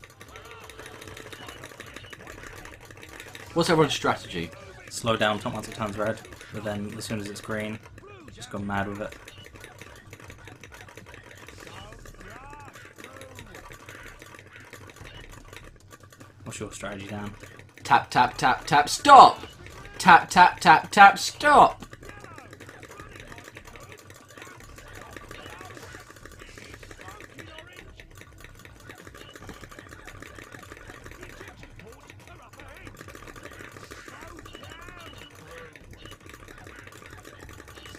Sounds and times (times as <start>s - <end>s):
Speech: 3.6s - 9.2s, 16.5s - 25.9s.